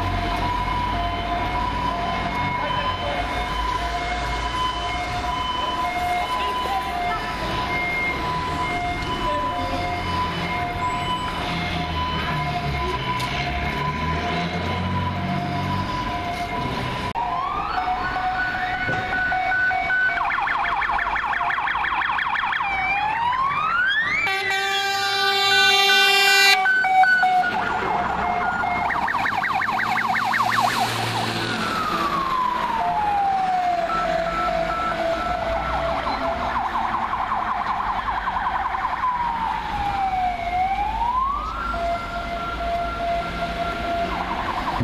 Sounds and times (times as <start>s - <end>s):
Police car (siren): 0.0s - 44.8s.